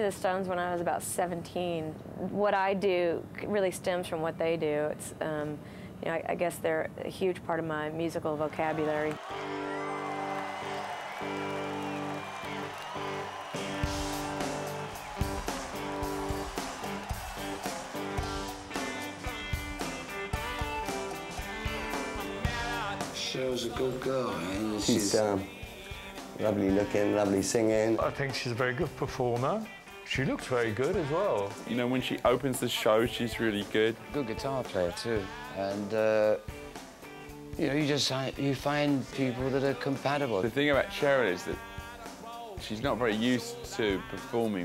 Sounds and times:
Music: 7.6s - 44.6s.

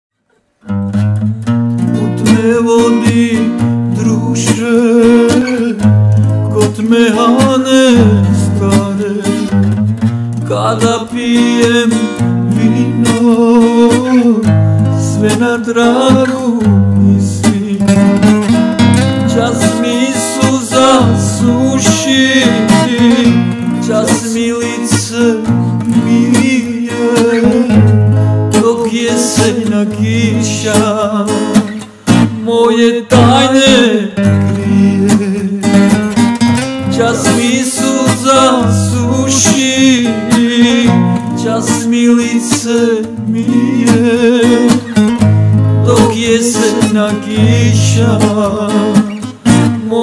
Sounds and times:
Acoustic guitar: 0.1s - 50.0s.

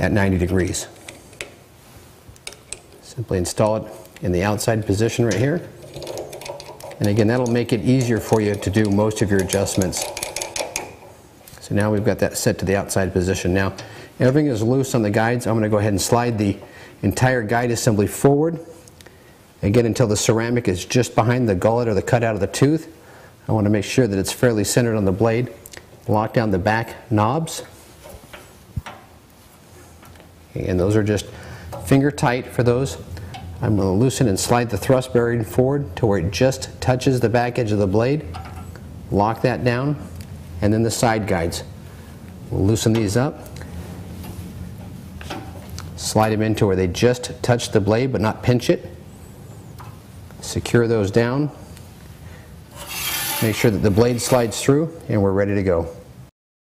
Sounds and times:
Speech: 0.0s - 1.0s, 3.0s - 5.7s, 7.0s - 10.0s, 11.6s - 18.7s, 19.6s - 22.9s, 23.5s - 27.7s, 30.5s - 31.3s, 31.9s - 33.0s, 33.6s - 38.3s, 39.1s - 41.7s, 42.5s - 43.5s, 46.0s - 49.0s, 50.4s - 51.6s, 53.4s - 56.0s
Tools: 2.4s - 3.0s, 5.3s - 11.2s, 52.8s - 54.4s.

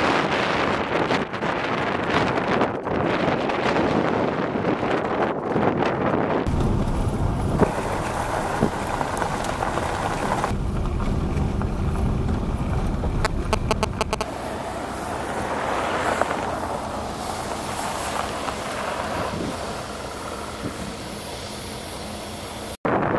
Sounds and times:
Vehicle: 0.0s - 23.1s.

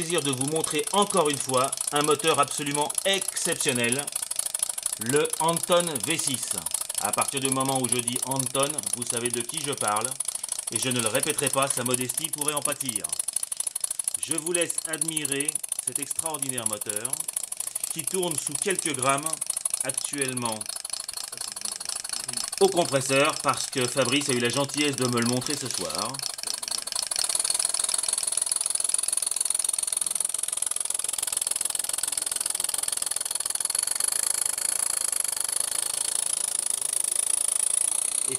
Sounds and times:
Idling: 0.0s - 38.3s.

